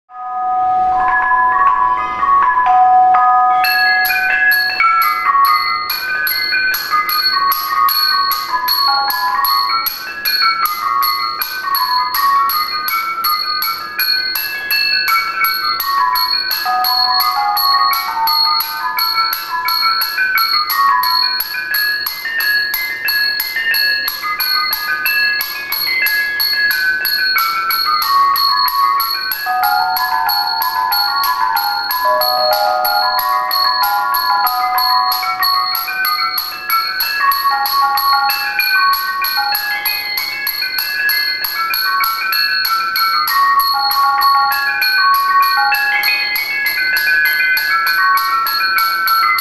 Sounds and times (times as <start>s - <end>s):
Marimba, xylophone: 0.1s - 49.4s.